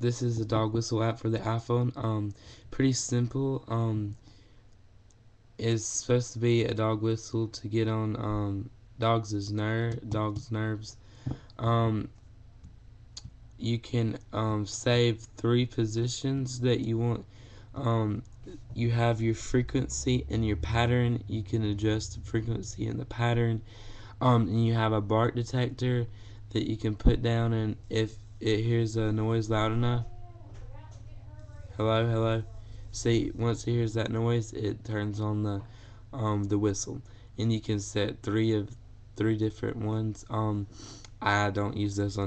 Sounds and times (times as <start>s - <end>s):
Speech: 0.0s - 4.2s, 5.6s - 11.0s, 11.6s - 12.2s, 13.6s - 23.6s, 24.2s - 42.2s.